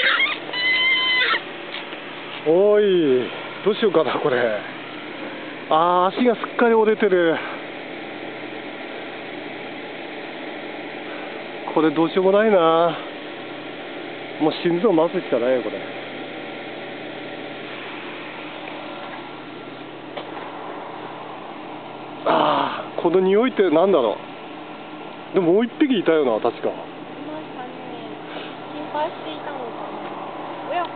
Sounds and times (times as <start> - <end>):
Speech: 2.5 - 4.7, 14.4 - 15.8.